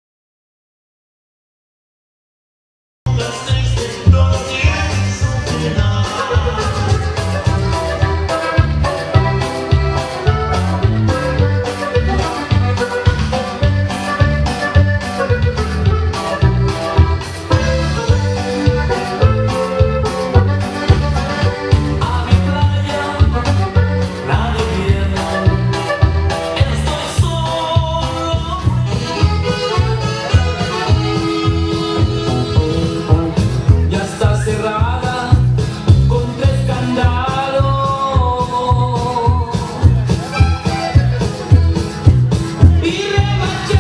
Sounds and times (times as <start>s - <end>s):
Music: 3.1s - 43.8s.